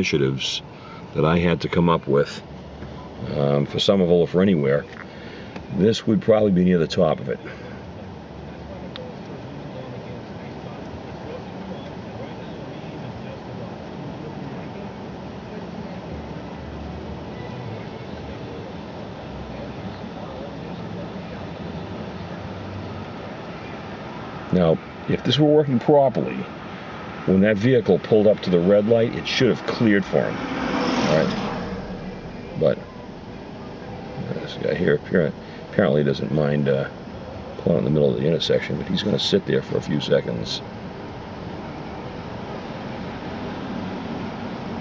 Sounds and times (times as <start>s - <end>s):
Speech: 0.0s - 2.4s, 3.2s - 5.0s, 5.7s - 7.6s, 8.5s - 16.3s, 24.5s - 26.5s, 27.3s - 30.4s, 31.0s - 31.4s, 32.6s - 32.8s, 34.0s - 37.0s, 37.6s - 40.6s
Traffic noise, roadway noise: 0.0s - 44.8s.